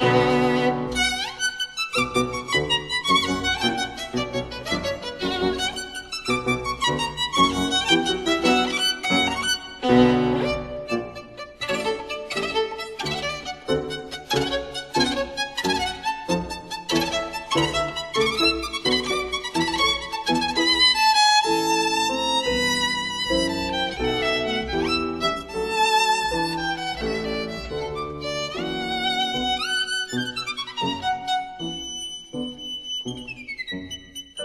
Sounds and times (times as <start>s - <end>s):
Violin, fiddle: 0.0s - 34.4s.